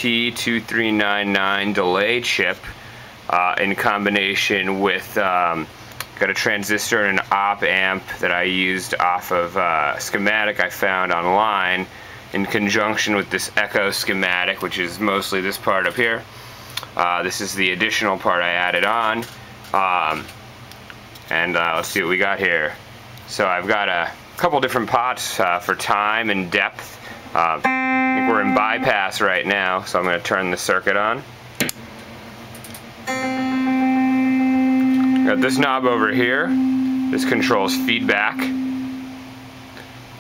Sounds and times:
Speech: 0.0 - 20.3, 21.3 - 31.3, 35.2 - 38.6.

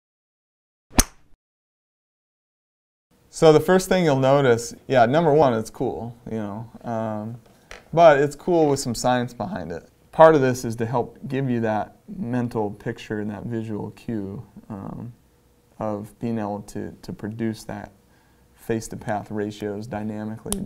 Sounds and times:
Speech: 3.3 - 15.2, 15.8 - 18.0, 18.6 - 20.6.

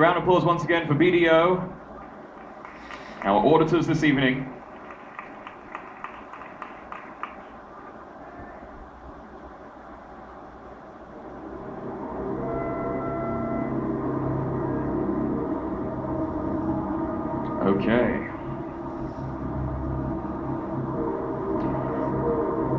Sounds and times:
Inside, large room or hall: 0.0 - 22.7
Music: 11.1 - 22.7.

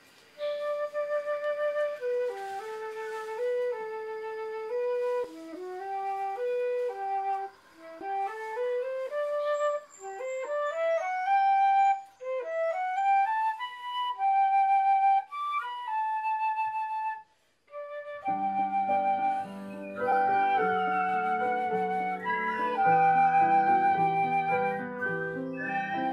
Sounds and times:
Flute: 0.0 - 26.1.

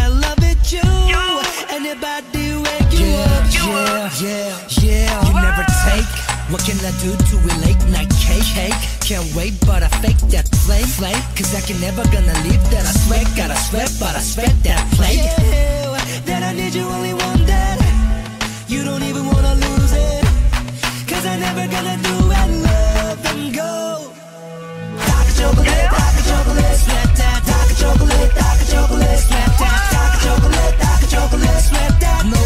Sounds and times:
Music: 0.0 - 32.4.

